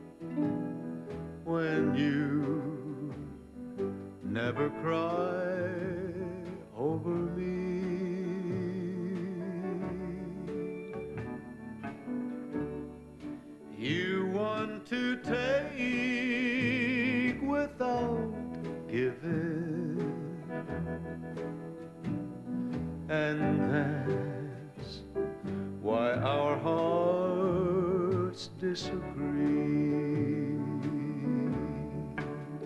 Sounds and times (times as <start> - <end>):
Music: 0.0 - 32.6
Male singing: 1.4 - 3.4, 4.3 - 10.8, 13.8 - 20.9, 23.1 - 25.2, 25.8 - 32.6.